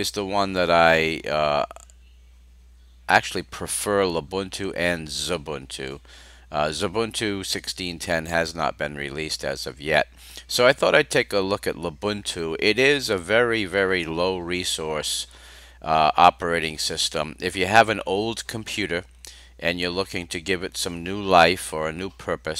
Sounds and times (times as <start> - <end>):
Speech: 0.0 - 1.8, 3.1 - 22.5.